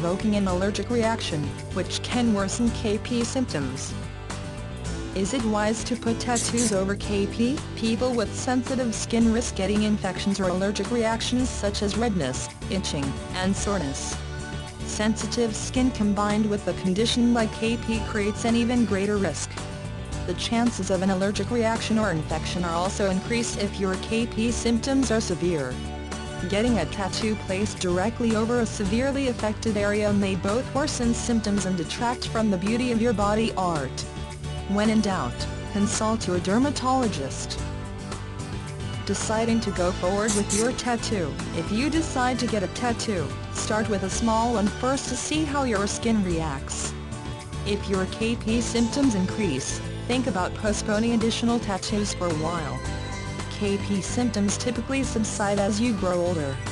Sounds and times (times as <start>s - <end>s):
Speech: 0.0s - 3.9s, 5.2s - 14.1s, 14.9s - 19.6s, 20.3s - 25.7s, 26.4s - 34.0s, 34.7s - 37.6s, 39.1s - 46.9s, 47.7s - 52.8s, 53.5s - 56.6s
Music: 0.0s - 56.7s.